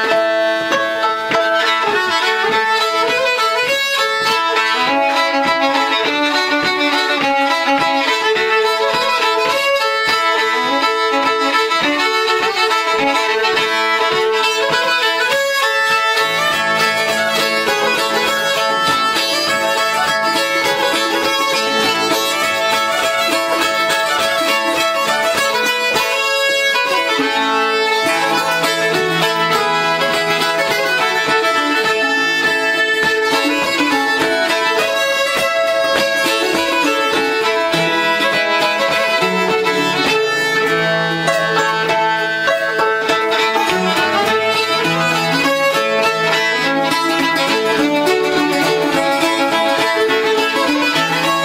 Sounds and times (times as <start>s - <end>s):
Banjo: 0.0s - 51.4s
Violin, fiddle: 0.0s - 51.4s.